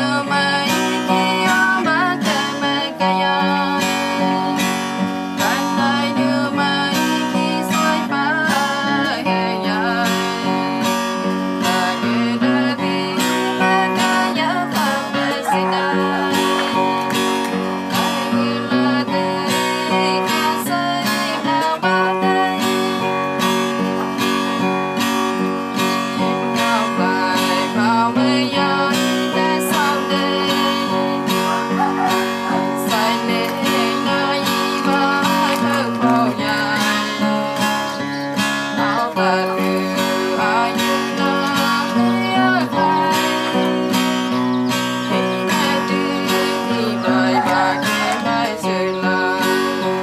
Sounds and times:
Female singing: 0.0s - 23.2s, 26.2s - 50.0s
Music: 0.0s - 50.0s.

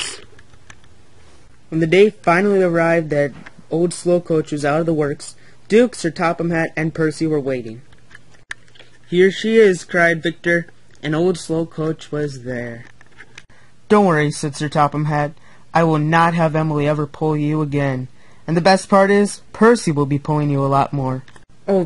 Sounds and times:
Speech: 1.7s - 7.9s, 9.1s - 12.9s, 13.9s - 21.8s.

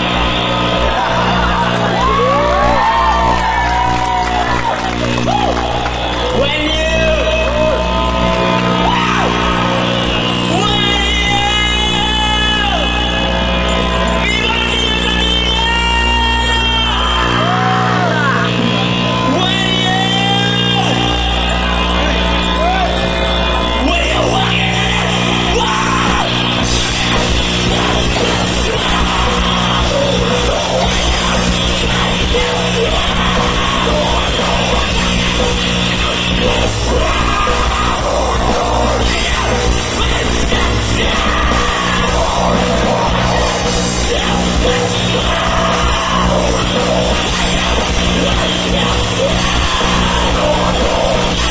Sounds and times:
Music: 0.0s - 51.5s.

